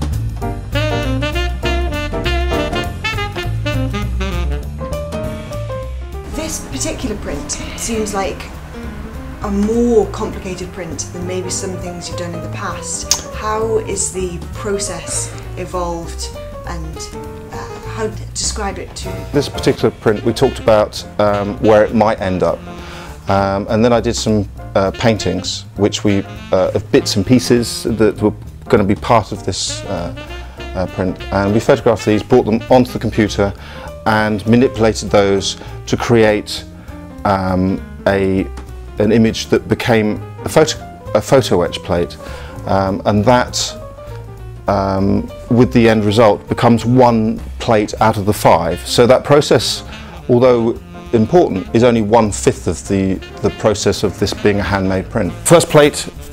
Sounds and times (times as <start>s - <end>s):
Music: 0.0s - 56.3s
Speech: 6.3s - 8.5s, 9.4s - 22.6s, 23.3s - 30.2s, 30.8s - 36.7s, 37.3s - 43.8s, 44.7s - 56.2s.